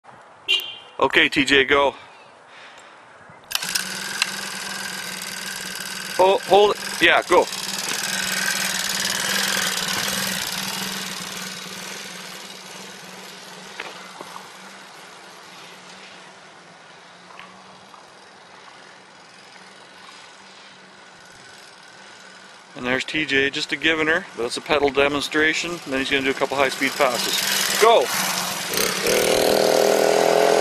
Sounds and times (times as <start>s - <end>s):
Vibration: 3.5s - 16.2s, 17.3s - 30.6s
Motorcycle: 3.5s - 30.6s.